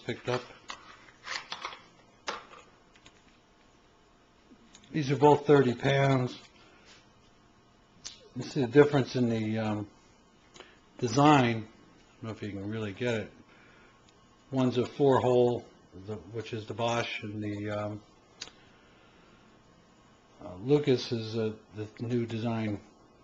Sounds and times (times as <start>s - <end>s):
Speech: 0.0s - 0.5s, 4.9s - 6.5s, 8.1s - 10.0s, 11.0s - 13.4s, 14.5s - 18.1s, 20.4s - 22.9s.